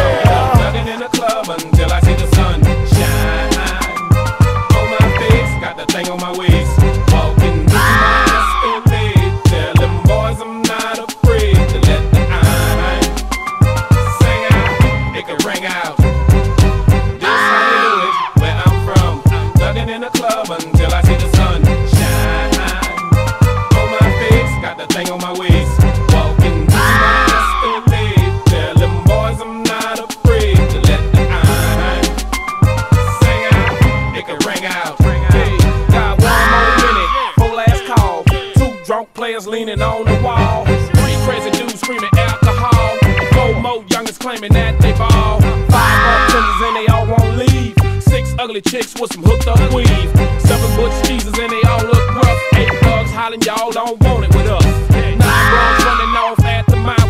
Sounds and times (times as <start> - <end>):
Music: 0.0 - 57.1.